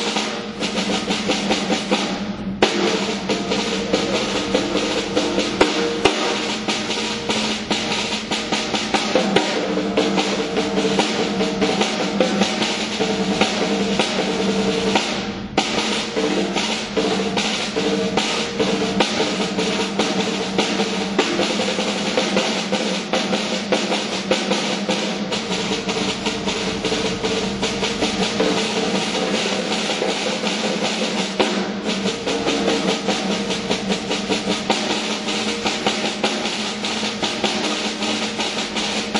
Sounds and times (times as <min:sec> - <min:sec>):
Bass drum: 0:00.0 - 0:39.1
Drum kit: 0:00.0 - 0:39.1
Drum roll: 0:00.0 - 0:39.1
Rimshot: 0:00.0 - 0:39.1.